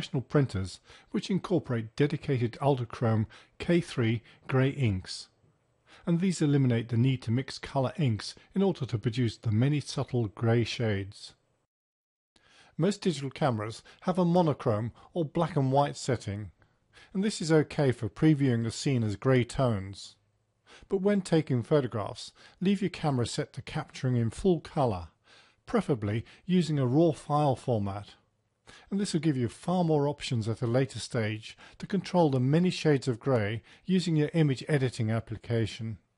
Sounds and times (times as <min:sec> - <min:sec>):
Speech: 0:00.0 - 0:05.4, 0:06.0 - 0:11.4, 0:12.8 - 0:20.2, 0:20.9 - 0:28.2, 0:28.8 - 0:36.1.